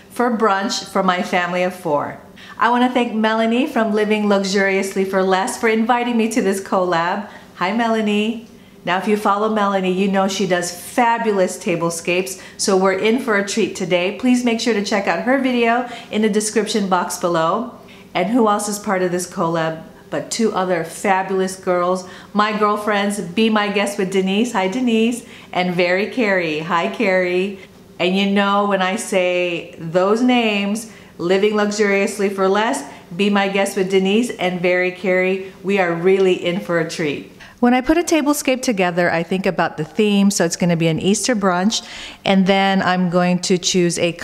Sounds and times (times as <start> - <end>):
Speech: 0.1 - 44.2.